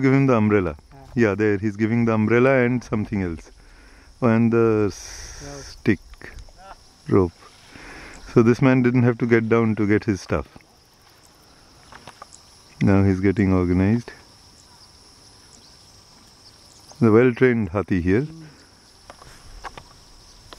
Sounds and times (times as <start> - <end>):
Speech: 12.8 - 14.2, 17.0 - 18.5.